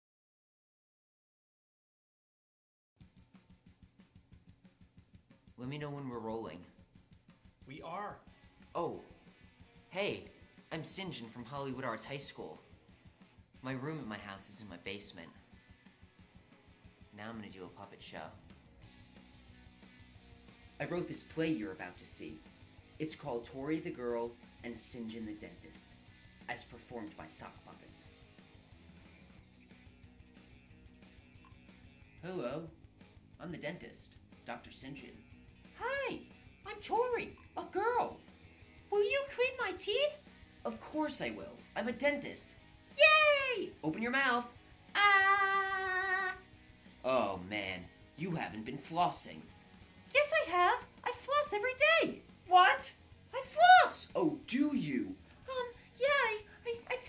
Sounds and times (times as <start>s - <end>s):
Speech: 5.6s - 6.8s, 7.7s - 9.2s, 9.9s - 12.7s, 13.6s - 15.4s, 17.1s - 18.4s, 20.8s - 22.4s, 23.0s - 28.1s, 33.4s - 38.2s, 38.9s - 46.4s, 47.1s - 49.5s, 50.1s - 57.0s.